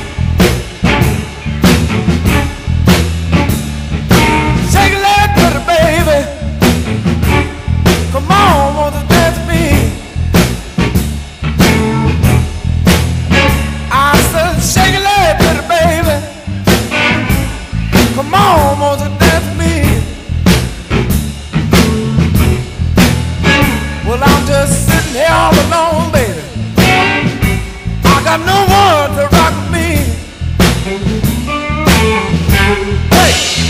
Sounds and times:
Music: 0.0 - 33.7.

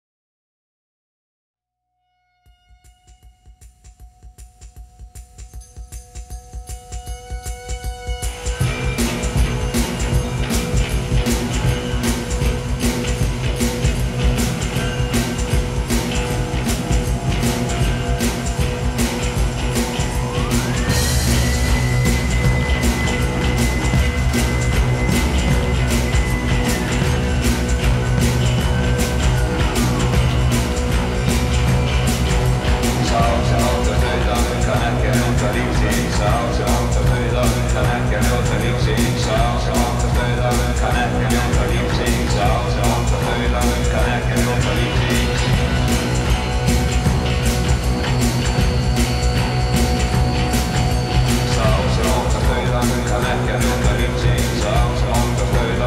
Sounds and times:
Mantra: 33.0 - 45.5, 51.5 - 55.8.

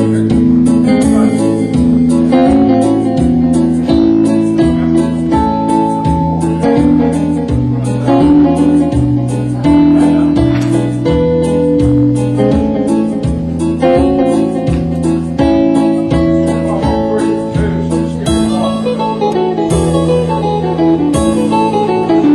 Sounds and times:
Music: 0.0 - 22.3.

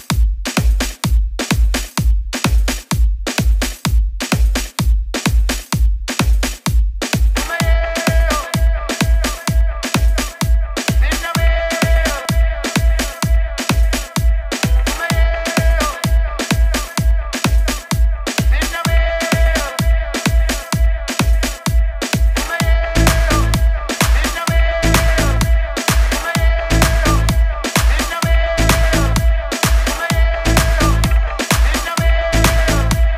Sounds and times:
Music: 0.0 - 33.1.

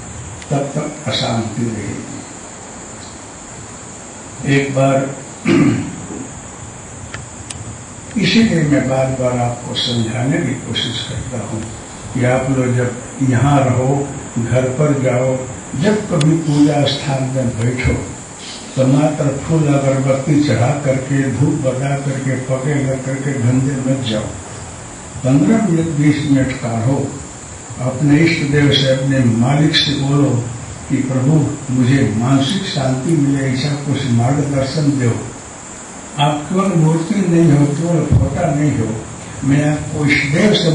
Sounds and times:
Speech: 0.5 - 2.2, 4.4 - 5.9, 8.2 - 24.4, 25.2 - 27.2, 27.8 - 35.4, 36.2 - 40.7.

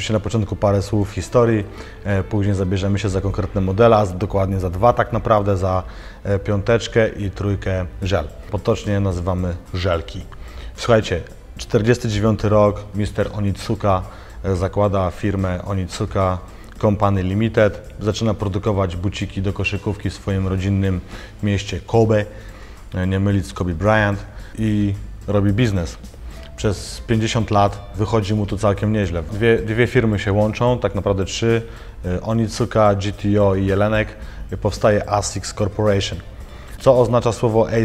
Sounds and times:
Music: 0.0 - 37.8
Speech: 0.0 - 37.8.

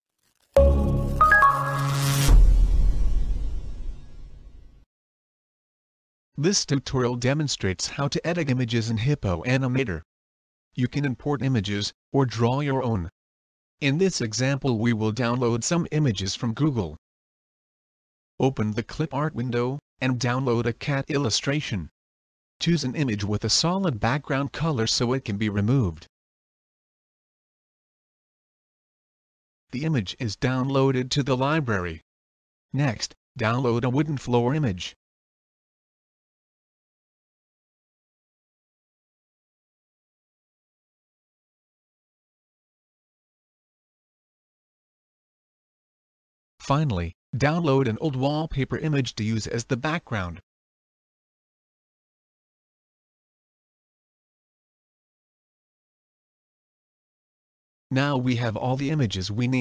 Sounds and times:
Speech: 6.4 - 10.1, 10.8 - 13.1, 13.8 - 17.0, 18.4 - 21.9, 22.6 - 26.1, 29.7 - 32.0, 32.8 - 35.0, 46.6 - 50.4, 57.9 - 59.6.

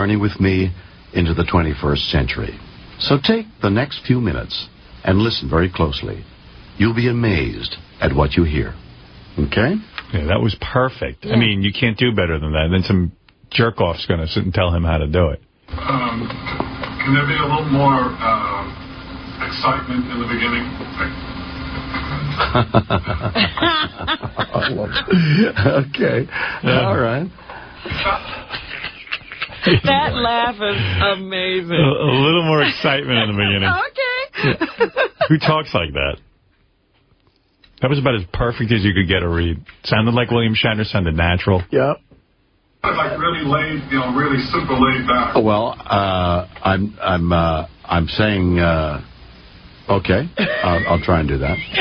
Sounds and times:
Speech: 9.4 - 16.4, 19.4 - 21.2, 35.3 - 36.2, 37.8 - 42.0, 42.8 - 49.1, 49.9 - 51.8.

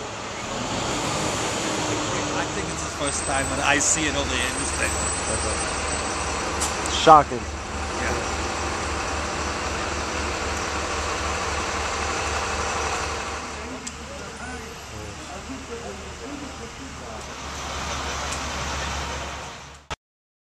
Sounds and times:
Outside, urban or manmade: 0.0 - 20.0
Speech: 1.6 - 5.6, 6.9 - 8.3, 13.6 - 17.4.

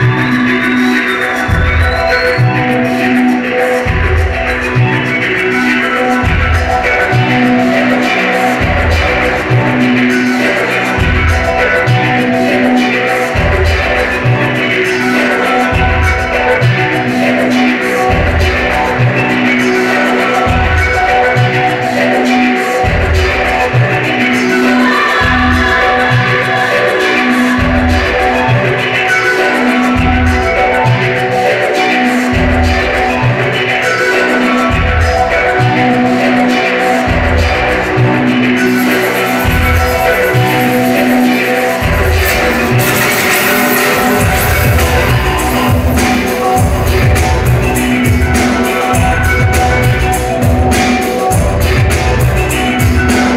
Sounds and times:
Music: 0.0 - 53.3.

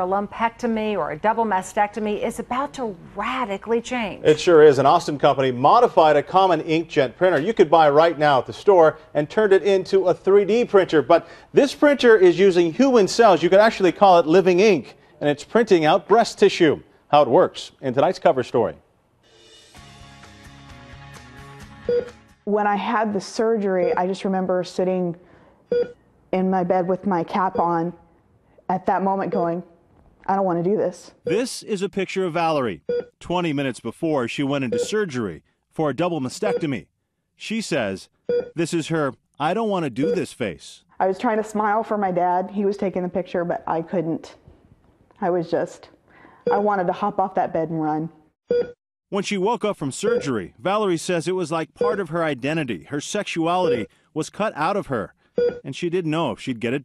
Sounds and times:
Speech: 31.3 - 40.8, 49.2 - 56.8.

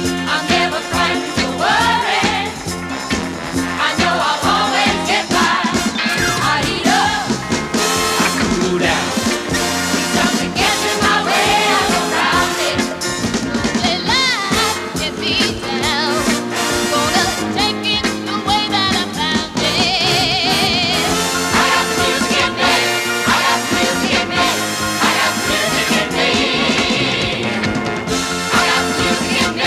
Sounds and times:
Exciting music: 0.0 - 17.9, 18.8 - 29.6
Dance music: 0.0 - 18.0, 18.8 - 29.6
Rhythm and blues: 0.0 - 29.6.

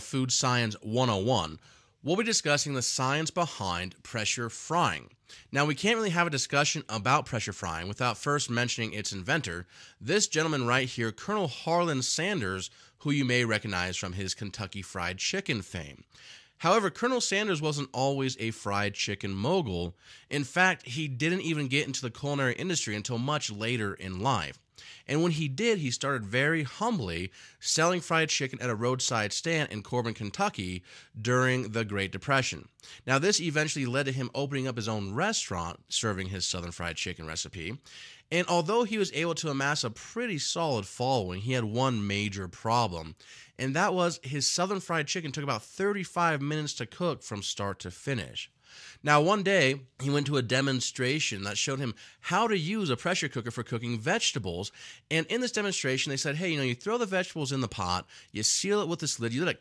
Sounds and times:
Speech: 0.0 - 59.6.

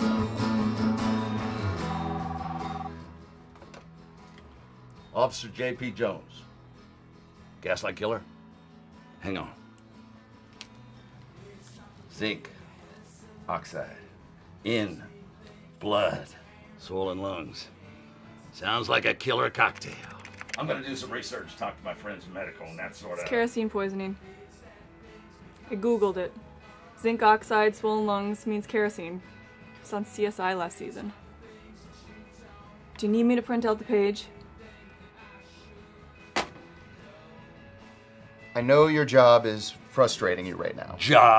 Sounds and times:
Music: 0.0 - 41.3.

